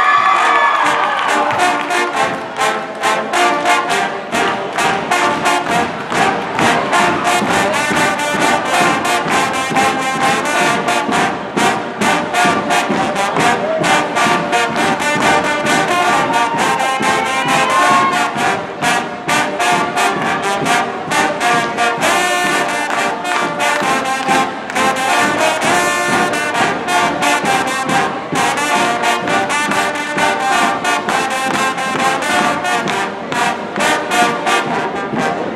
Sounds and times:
Trombone: 0:00.1 - 0:35.5.

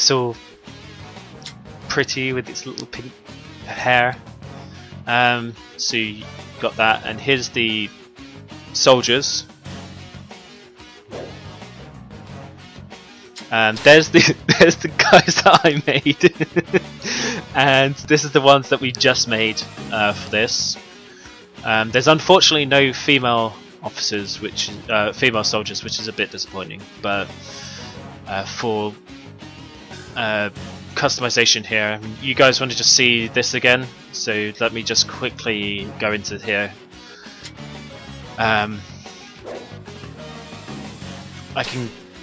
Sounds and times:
Speech: 0:00.0 - 0:00.4, 0:01.9 - 0:04.2, 0:05.1 - 0:07.9, 0:08.8 - 0:09.5, 0:13.4 - 0:16.8, 0:17.4 - 0:20.8, 0:21.6 - 0:27.5, 0:28.3 - 0:29.0, 0:30.2 - 0:37.3, 0:38.4 - 0:38.9, 0:41.6 - 0:42.0
Music: 0:00.0 - 0:42.2.

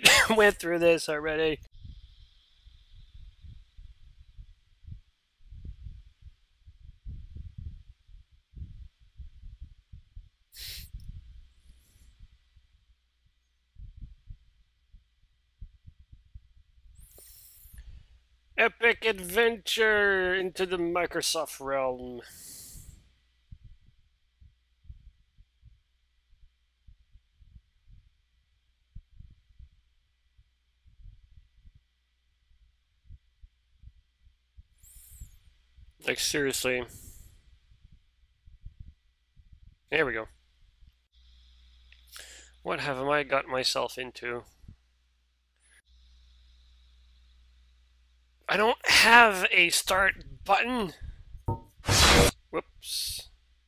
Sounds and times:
Speech: 0:00.0 - 0:01.6, 0:18.6 - 0:22.4, 0:36.0 - 0:36.9, 0:39.9 - 0:40.3, 0:42.7 - 0:44.4, 0:48.5 - 0:51.0, 0:52.5 - 0:53.2.

